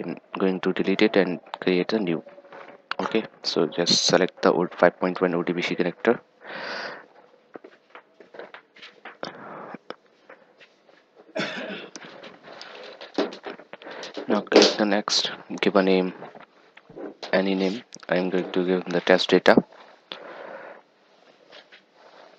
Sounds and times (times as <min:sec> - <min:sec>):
Speech: 0:00.0 - 0:02.4, 0:03.0 - 0:06.2, 0:14.2 - 0:16.3, 0:17.3 - 0:19.7.